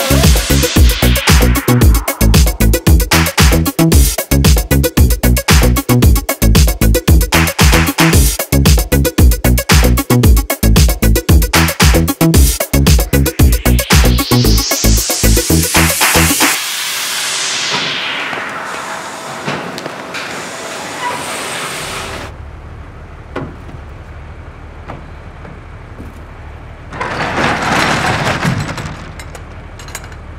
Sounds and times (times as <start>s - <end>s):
Music: 0.0s - 18.4s
Inside, large room or hall: 18.8s - 22.7s.